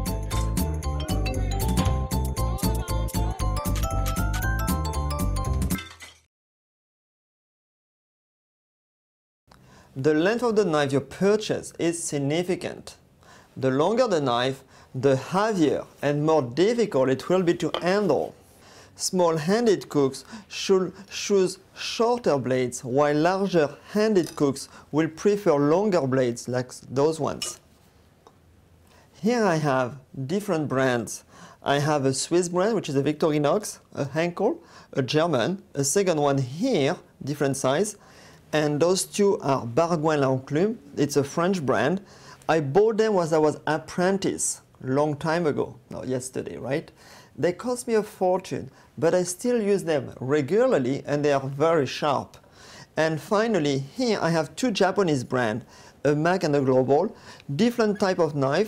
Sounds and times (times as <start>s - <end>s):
Speech: 10.0s - 13.0s, 13.6s - 18.4s, 19.0s - 27.6s, 29.2s - 52.4s, 53.0s - 58.6s.